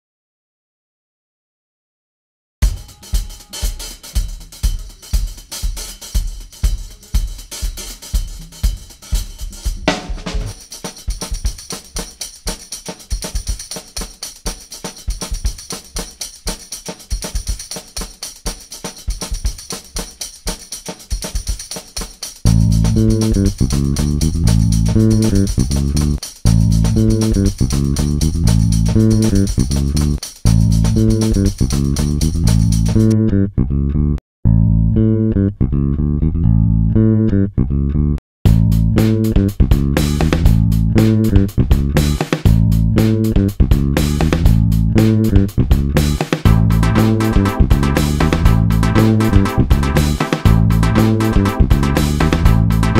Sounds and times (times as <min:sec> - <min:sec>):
Music: 0:02.6 - 0:33.3, 0:38.5 - 0:53.0.